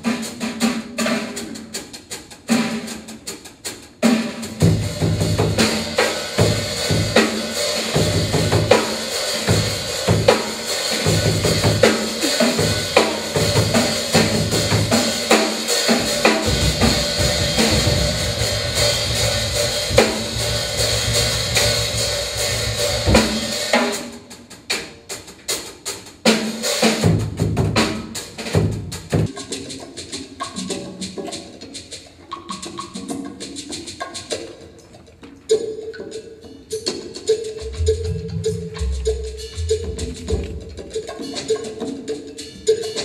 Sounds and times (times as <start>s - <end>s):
Percussion: 0.0s - 43.0s.